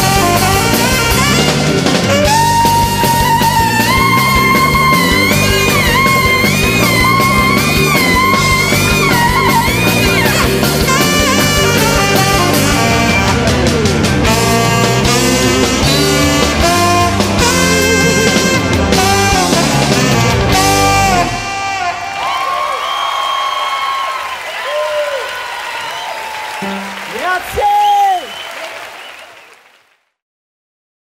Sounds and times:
Rock music: 0:00.0 - 0:23.0, 0:26.6 - 0:27.9
Saxophone: 0:00.0 - 0:23.0
Whoop: 0:22.2 - 0:26.6
Speech: 0:27.1 - 0:28.3.

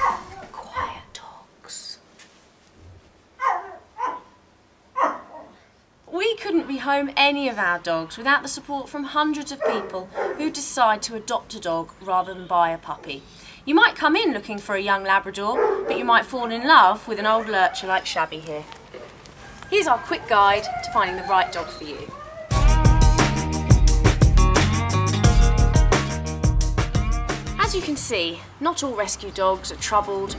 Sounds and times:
Yip: 0:00.0 - 0:00.4, 0:03.4 - 0:04.4, 0:05.0 - 0:05.6
Speech: 0:06.1 - 0:18.7, 0:19.7 - 0:22.2, 0:27.6 - 0:30.3.

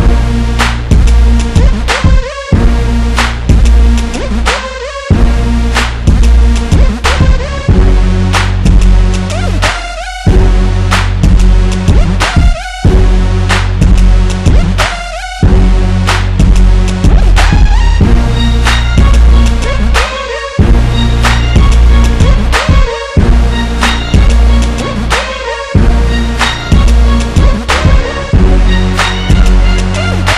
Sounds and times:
Exciting music: 0:00.0 - 0:30.3.

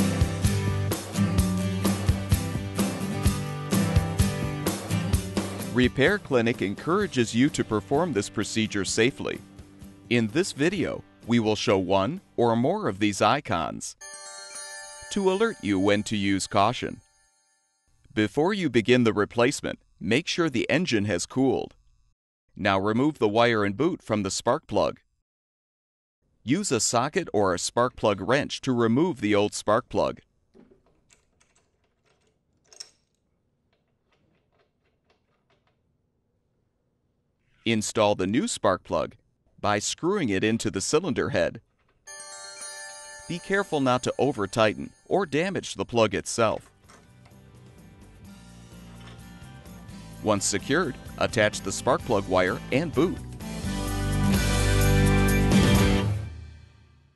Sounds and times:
Music: 0:00.0 - 0:13.2, 0:14.0 - 0:17.9, 0:42.1 - 0:45.7, 0:46.5 - 0:57.1
Speech: 0:05.7 - 0:09.4, 0:10.1 - 0:14.0, 0:15.1 - 0:17.0, 0:18.2 - 0:21.8, 0:22.6 - 0:25.0, 0:26.5 - 0:30.2, 0:37.6 - 0:41.6, 0:43.3 - 0:46.7, 0:50.2 - 0:53.2.

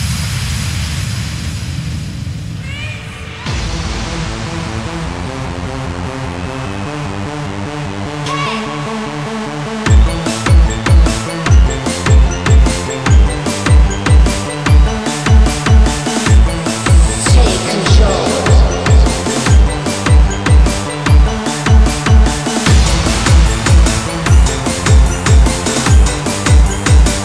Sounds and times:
Drum and bass: 0:00.0 - 0:27.2.

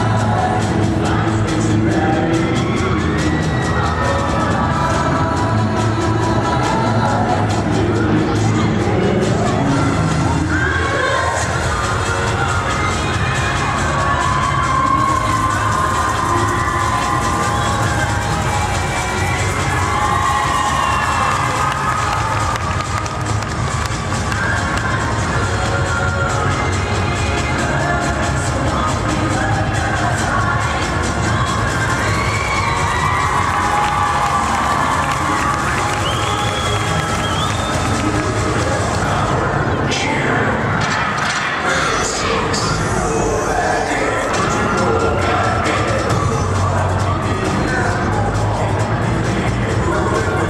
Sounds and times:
Cheering: 0:00.0 - 0:39.6, 0:40.7 - 0:50.4.

